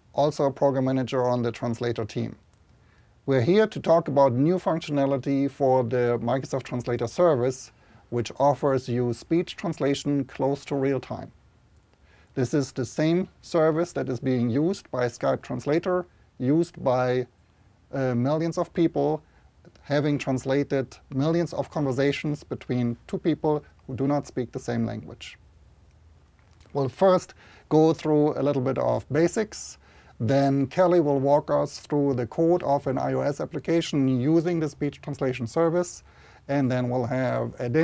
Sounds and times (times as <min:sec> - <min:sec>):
Male speech, man speaking: 0:00.2 - 0:02.4, 0:03.3 - 0:11.4, 0:12.4 - 0:17.3, 0:17.9 - 0:25.4, 0:26.7 - 0:37.8.